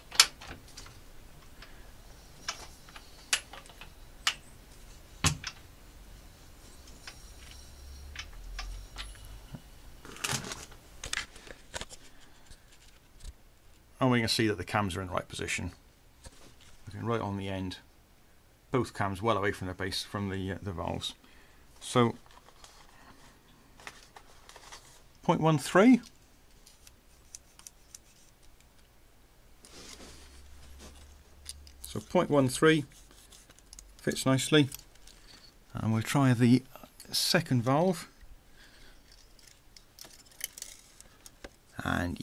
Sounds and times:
Speech: 14.0s - 15.8s, 16.9s - 17.9s, 18.7s - 21.2s, 21.8s - 22.2s, 25.2s - 26.1s, 31.8s - 32.9s, 34.0s - 34.8s, 35.7s - 38.1s, 41.8s - 42.2s.

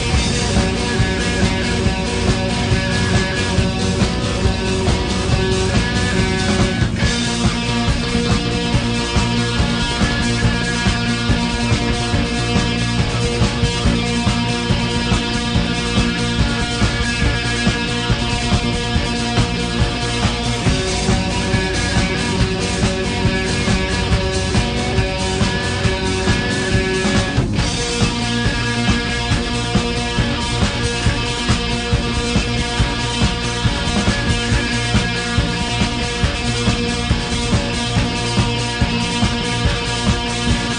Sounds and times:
Psychedelic rock: 0.0s - 40.7s.

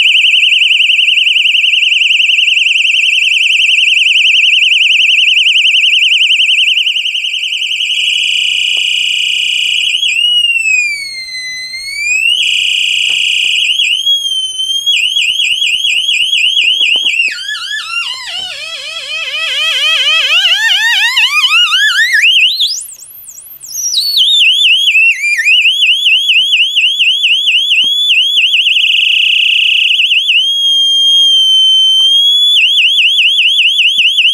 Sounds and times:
Inside, small room: 0.0s - 34.3s
Siren: 0.0s - 34.3s.

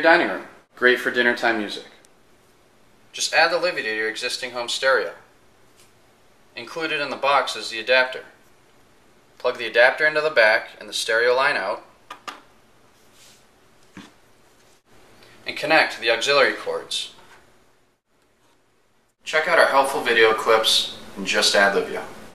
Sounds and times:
Speech: 0.0s - 2.0s, 3.1s - 5.3s, 6.6s - 8.4s, 9.4s - 11.9s, 15.4s - 17.2s, 19.3s - 22.2s.

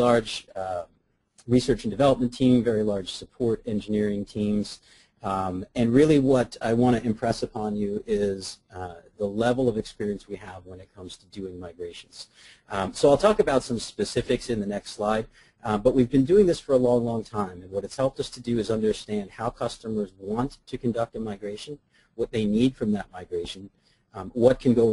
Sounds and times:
Speech: 0.0s - 24.9s.

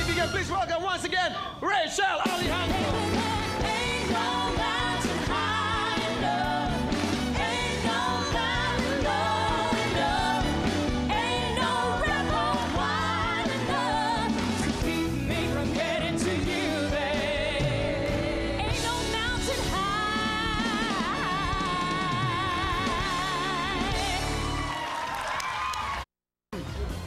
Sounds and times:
Music: 0.0s - 0.8s, 2.2s - 26.0s, 26.6s - 27.0s.

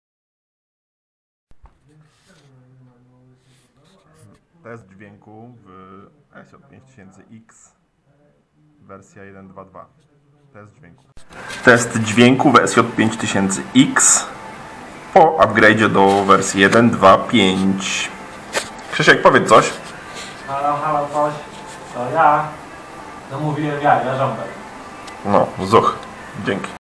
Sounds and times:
Speech: 1.8s - 14.4s, 15.2s - 18.2s, 18.9s - 19.8s, 20.5s - 22.6s, 25.2s - 26.8s.

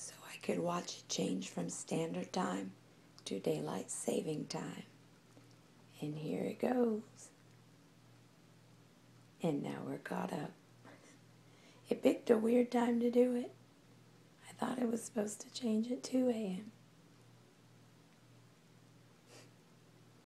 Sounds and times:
Speech: 0.0s - 5.0s, 5.9s - 7.4s, 9.4s - 10.6s, 11.9s - 13.6s, 14.5s - 16.8s.

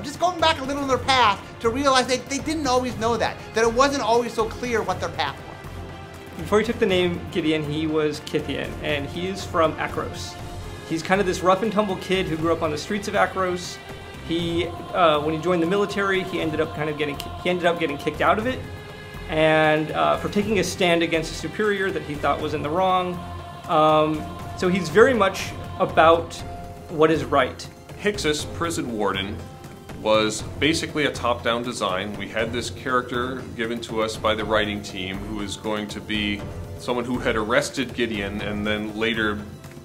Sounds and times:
Speech: 0.0s - 5.4s, 6.4s - 18.6s, 19.3s - 29.4s, 30.0s - 39.6s
Music: 0.0s - 39.8s.

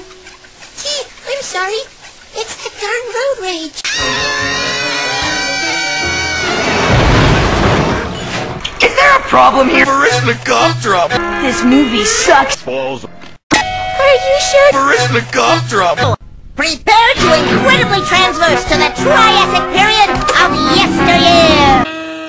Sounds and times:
Speech: 14.6s - 21.8s
Music: 17.2s - 21.9s.

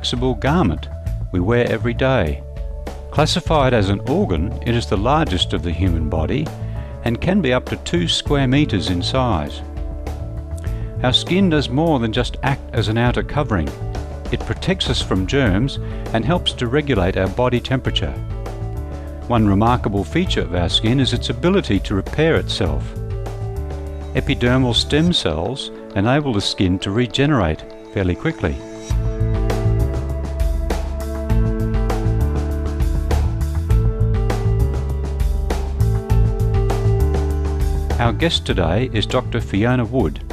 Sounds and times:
Speech: 0.0s - 2.4s, 3.2s - 9.6s, 11.0s - 18.2s, 19.3s - 22.9s, 24.2s - 28.7s, 38.0s - 40.3s
Music: 0.0s - 40.3s.

